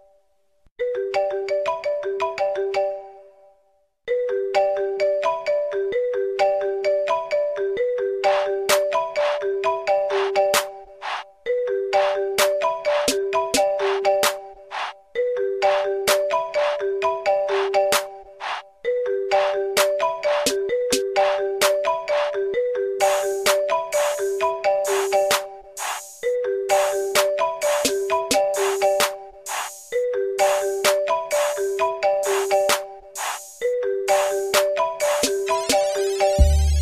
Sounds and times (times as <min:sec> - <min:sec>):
Marimba, xylophone: 0:00.8 - 0:03.5, 0:04.1 - 0:36.8.